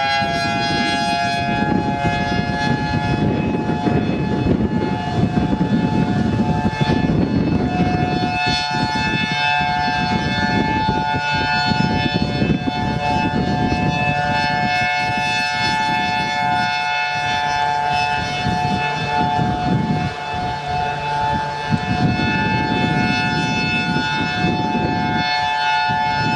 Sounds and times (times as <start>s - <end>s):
Civil defense siren: 0.0s - 26.3s.